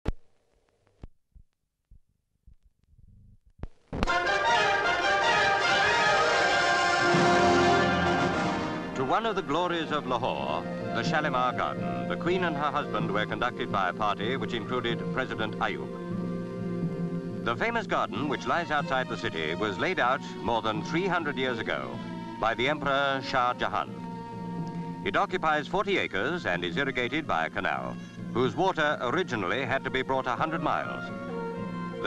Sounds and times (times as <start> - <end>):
Music: 3.9 - 32.0
Speech: 9.0 - 15.9, 17.5 - 23.9, 25.0 - 31.1.